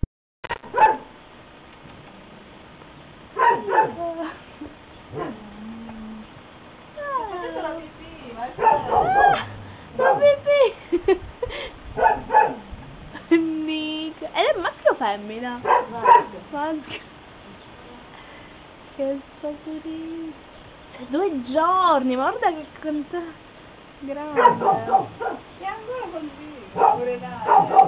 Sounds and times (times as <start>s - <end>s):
Speech: 7.0s - 9.4s, 13.3s - 17.0s, 24.0s - 27.8s.